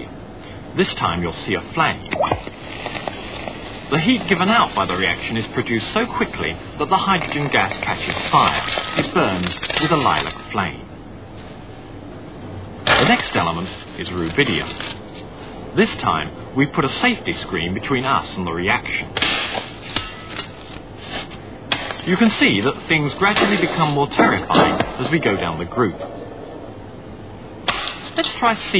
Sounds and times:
Speech: 0.8 - 2.4, 3.9 - 10.9, 12.9 - 14.8, 15.8 - 19.1, 22.0 - 26.1, 28.2 - 28.7.

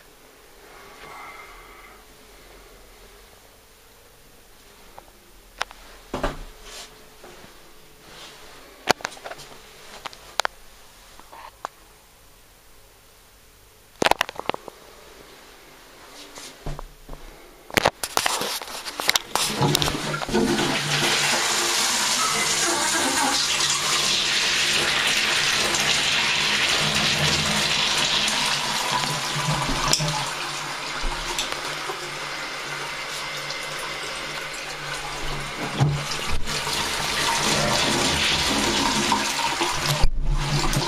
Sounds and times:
Toilet flush: 19.3 - 40.8
Water: 19.4 - 40.8.

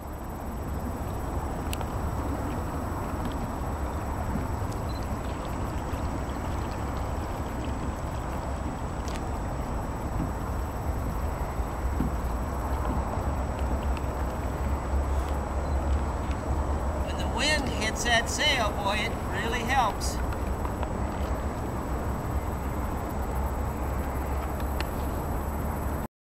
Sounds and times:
Speech: 17.1 - 20.2.

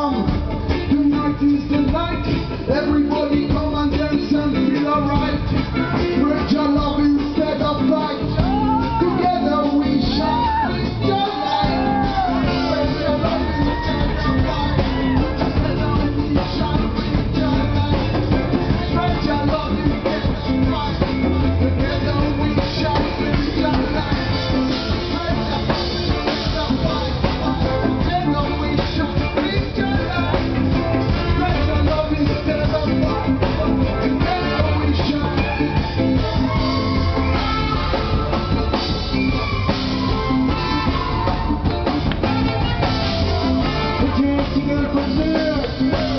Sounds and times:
Blues: 0.0 - 46.1.

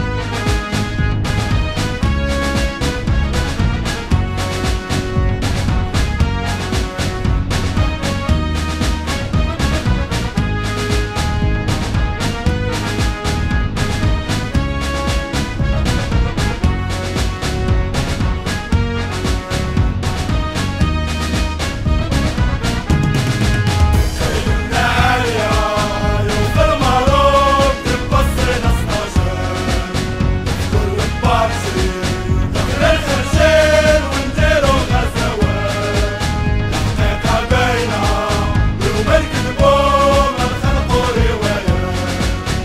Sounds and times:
Music: 0.0 - 42.6.

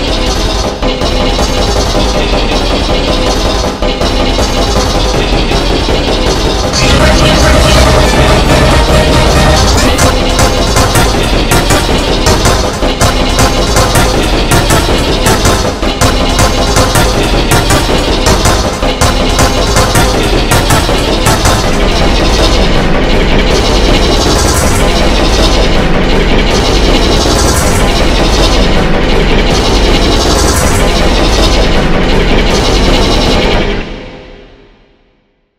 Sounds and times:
Music: 0.0 - 35.5.

